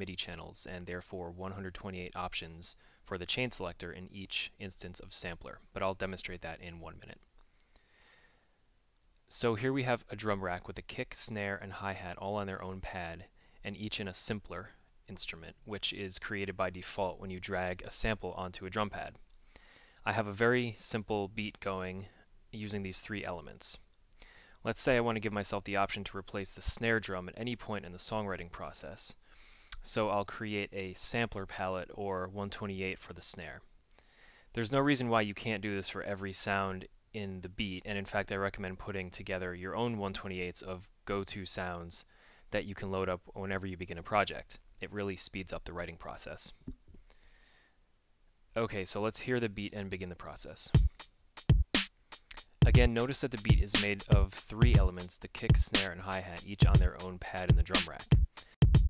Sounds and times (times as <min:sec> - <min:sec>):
Speech: 0:00.0 - 0:07.3, 0:09.3 - 0:19.2, 0:20.0 - 0:23.9, 0:24.6 - 0:29.2, 0:29.8 - 0:33.7, 0:34.5 - 0:46.6, 0:48.5 - 0:50.8, 0:52.6 - 0:58.2.